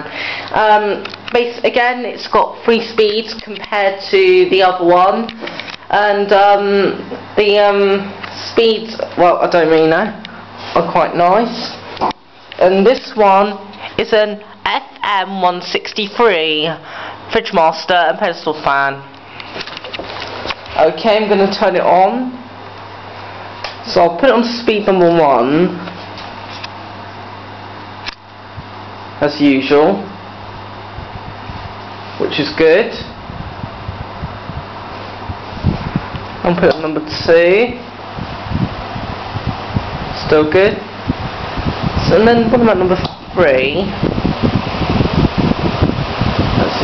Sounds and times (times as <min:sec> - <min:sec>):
Speech: 0:00.0 - 0:11.8, 0:12.6 - 0:19.1, 0:20.8 - 0:22.5, 0:23.8 - 0:25.9, 0:29.2 - 0:30.2, 0:32.2 - 0:33.2, 0:36.4 - 0:37.9, 0:40.2 - 0:40.9, 0:42.0 - 0:44.0.